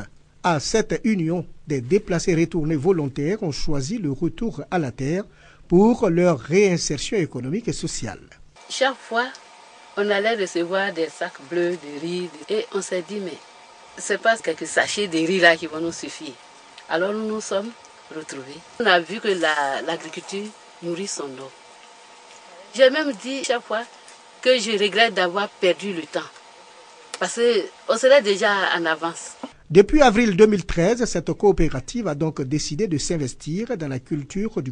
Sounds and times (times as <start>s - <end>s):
Speech: 0.0s - 9.4s, 10.0s - 13.4s, 14.0s - 21.6s, 22.6s - 26.4s, 27.2s - 34.7s.